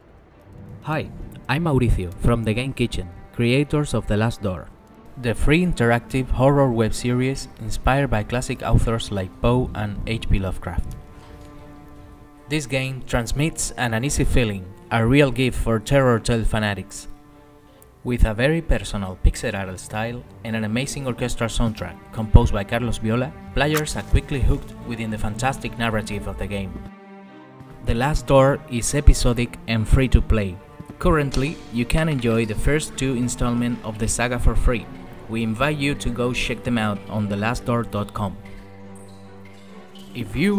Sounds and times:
Music: 0.0s - 40.5s
Speech: 0.8s - 10.9s, 12.5s - 17.1s, 18.0s - 26.8s, 27.8s - 38.4s, 40.1s - 40.5s.

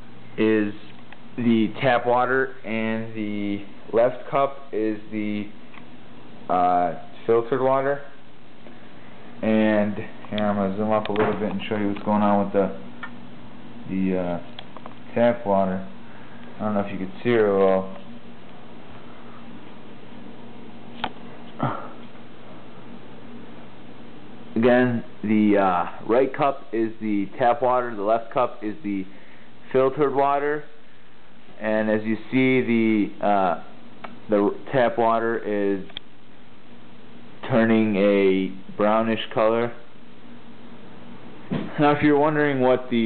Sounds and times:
Speech: 0.4s - 5.6s, 6.5s - 8.2s, 9.4s - 12.9s, 13.8s - 14.5s, 15.1s - 16.0s, 16.6s - 18.0s, 24.6s - 29.1s, 29.7s - 30.8s, 31.6s - 36.0s, 37.4s - 39.9s, 41.6s - 43.0s.

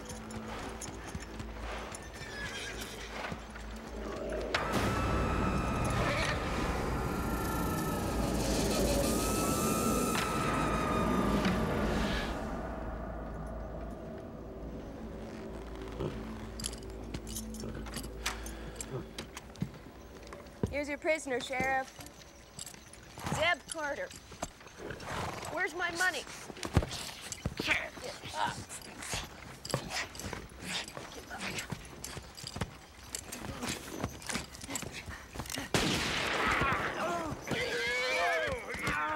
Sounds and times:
Animal: 21.4s - 35.7s.

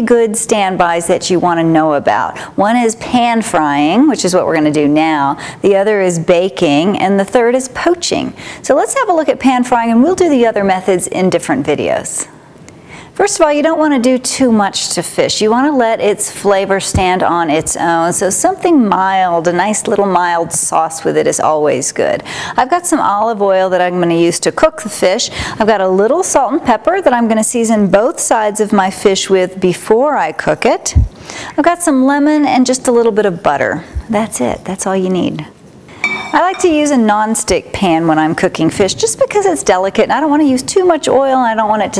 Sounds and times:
Speech: 0.0s - 12.3s, 13.2s - 35.6s, 36.3s - 41.9s.

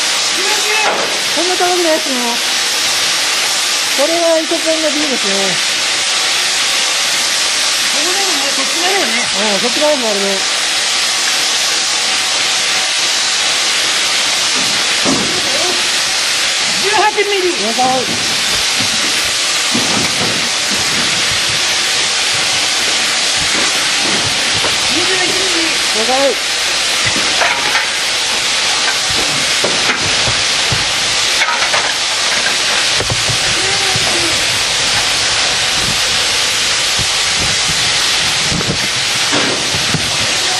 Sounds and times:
Speech: 0.4s - 2.4s, 4.0s - 5.6s, 7.9s - 10.5s, 16.8s - 18.1s, 24.9s - 26.4s, 33.5s - 34.4s.

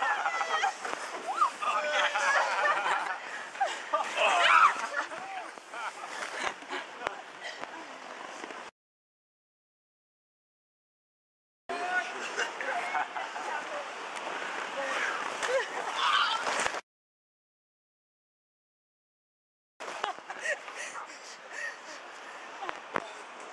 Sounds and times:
Whoop: 15.9s - 16.5s.

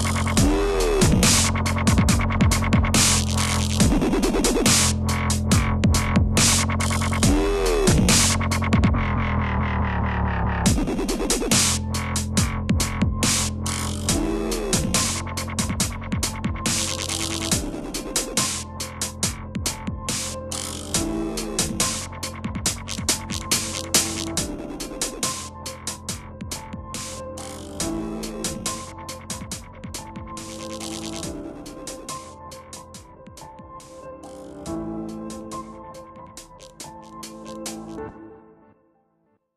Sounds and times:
Dubstep: 0.0s - 38.1s.

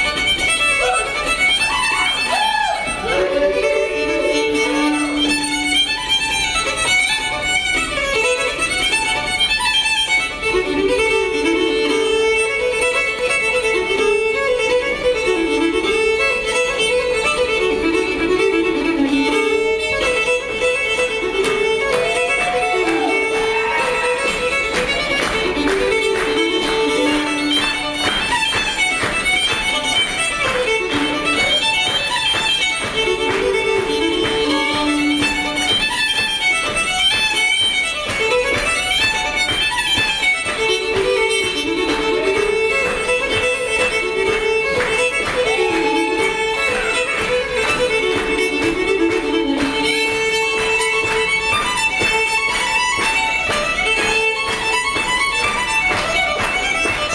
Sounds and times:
Violin, fiddle: 0.0s - 57.1s.

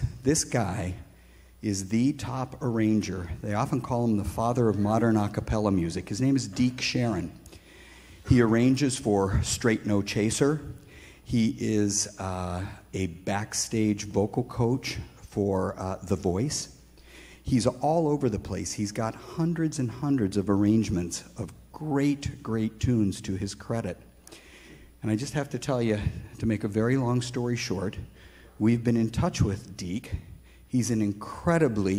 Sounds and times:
Speech: 0.0s - 7.4s, 8.2s - 16.8s, 17.4s - 24.1s, 25.0s - 31.9s.

